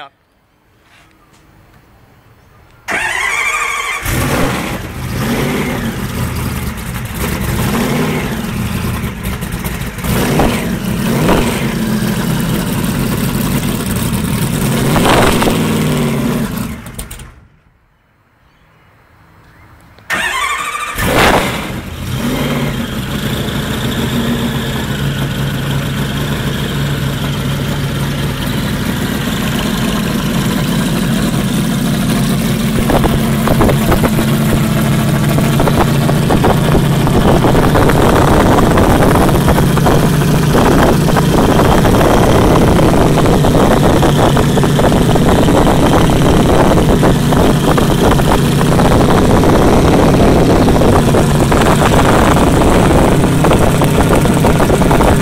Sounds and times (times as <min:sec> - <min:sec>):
Vehicle: 0:00.0 - 0:55.2.